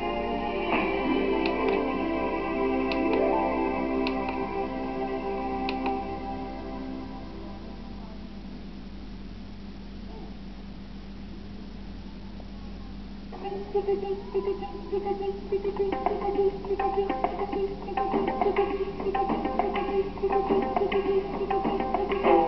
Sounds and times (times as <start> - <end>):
Music: 0.0 - 8.2, 13.3 - 22.4.